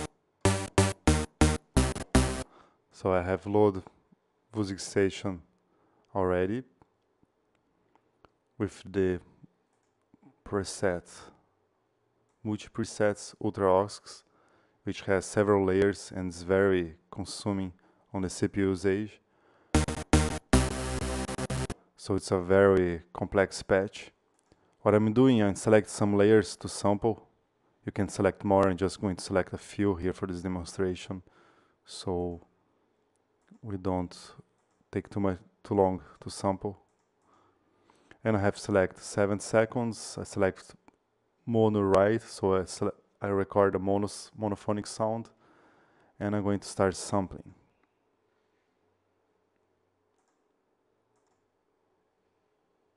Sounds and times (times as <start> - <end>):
Sampler: 0.0 - 2.5, 19.8 - 21.8
Speech: 3.0 - 5.5, 6.1 - 6.8, 8.6 - 9.4, 10.4 - 11.4, 12.4 - 19.3, 22.0 - 24.2, 24.8 - 32.5, 33.5 - 36.9, 38.2 - 40.8, 41.4 - 45.4, 46.2 - 47.7.